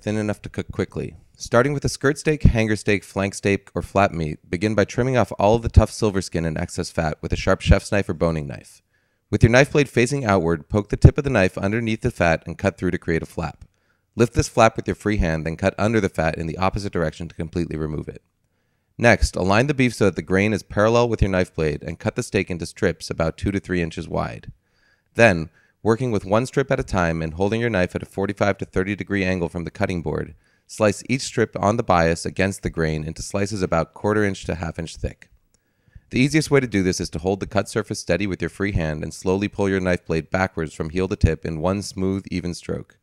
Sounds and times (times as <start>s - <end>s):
Speech: 0.0s - 18.2s, 19.0s - 24.6s, 25.2s - 35.3s, 36.1s - 43.0s.